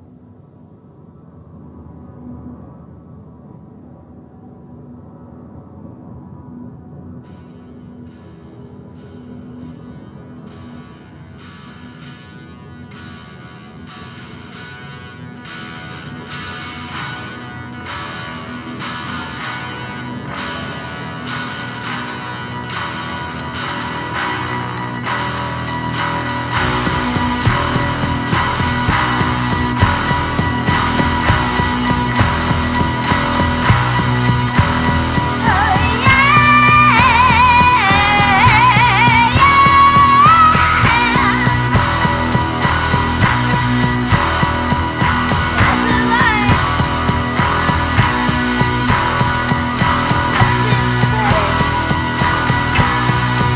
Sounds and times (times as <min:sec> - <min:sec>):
Music: 0:02.0 - 0:53.5.